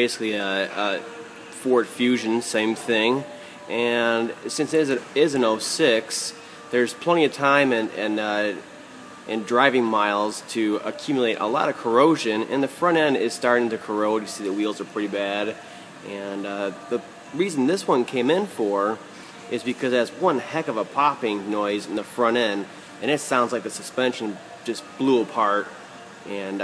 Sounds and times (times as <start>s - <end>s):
Speech: 0.0s - 1.0s, 1.6s - 8.6s, 9.3s - 25.7s, 26.3s - 26.6s.